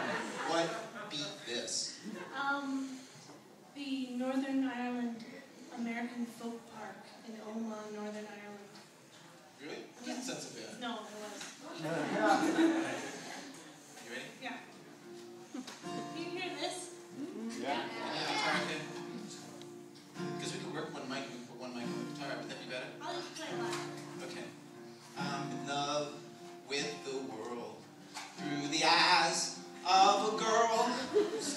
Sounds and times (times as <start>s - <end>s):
Music: 14.5s - 31.5s.